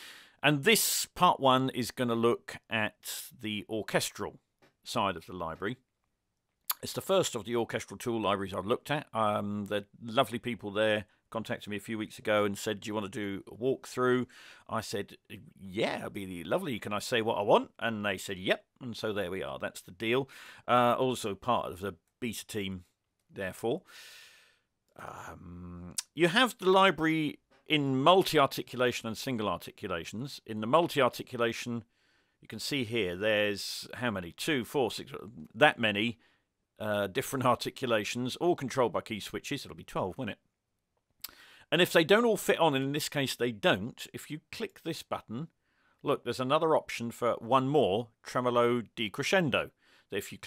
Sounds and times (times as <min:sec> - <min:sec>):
Speech: 0:00.4 - 0:05.8, 0:06.7 - 0:23.9, 0:25.0 - 0:31.9, 0:32.5 - 0:36.2, 0:36.8 - 0:40.4, 0:41.7 - 0:50.4.